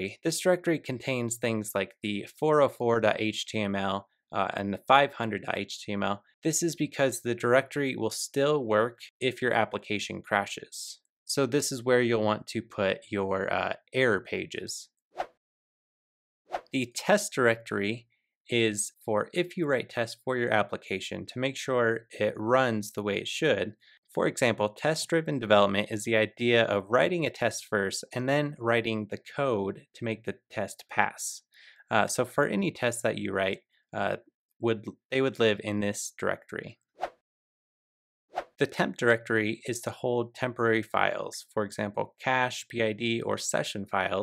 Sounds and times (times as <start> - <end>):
Speech: 0.0 - 14.9, 16.8 - 36.8, 38.6 - 44.2.